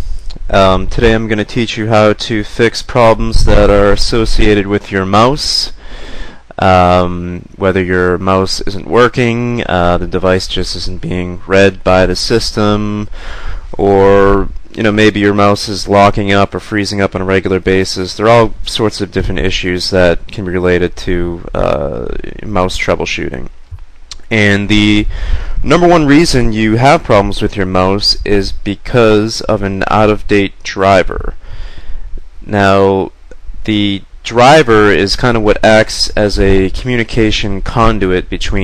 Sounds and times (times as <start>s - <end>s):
Speech: 0.3s - 5.8s, 6.5s - 31.4s, 32.4s - 38.6s.